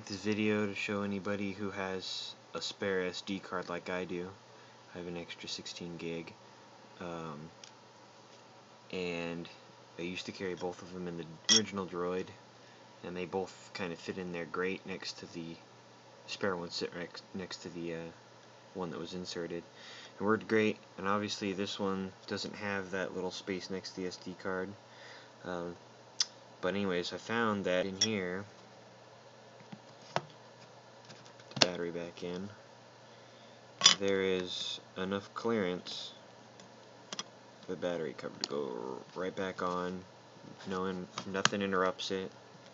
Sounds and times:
Speech: 0.0s - 6.4s, 7.0s - 7.6s, 8.9s - 12.4s, 13.0s - 15.7s, 16.3s - 18.2s, 18.8s - 24.8s, 25.4s - 25.8s, 26.6s - 28.5s, 31.6s - 32.6s, 33.9s - 36.2s, 37.7s - 42.4s.

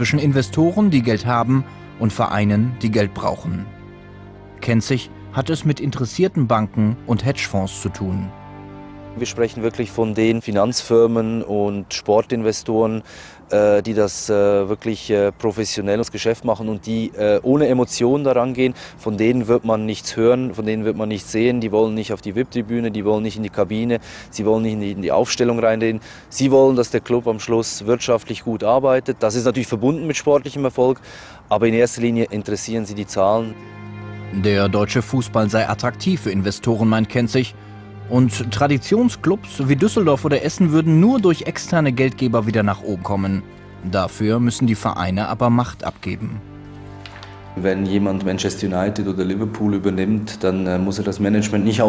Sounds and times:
Speech: 0.0s - 3.7s, 4.6s - 8.3s, 9.2s - 33.6s, 34.4s - 37.5s, 38.1s - 46.4s, 47.6s - 51.8s.

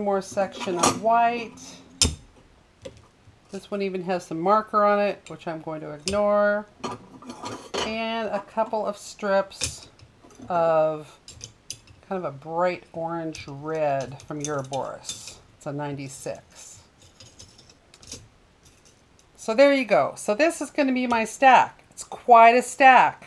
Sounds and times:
Speech: 0.0s - 1.8s, 3.6s - 6.7s, 7.8s - 9.9s, 10.5s - 11.1s, 12.1s - 16.8s, 19.4s - 23.2s.

